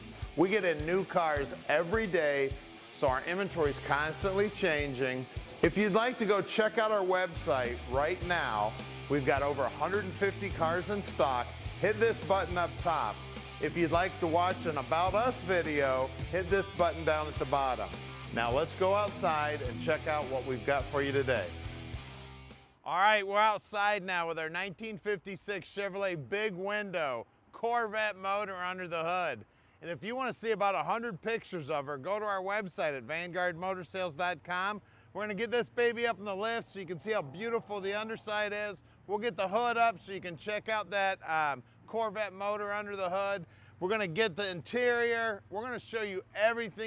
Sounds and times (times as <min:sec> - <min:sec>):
Speech: 0:00.0 - 0:21.6, 0:22.9 - 0:46.8
Music: 0:00.0 - 0:22.8.